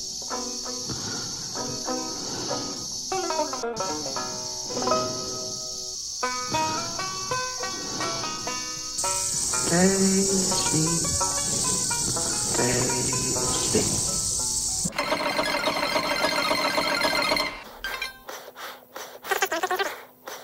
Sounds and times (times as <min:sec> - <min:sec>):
Music: 0:00.0 - 0:17.7.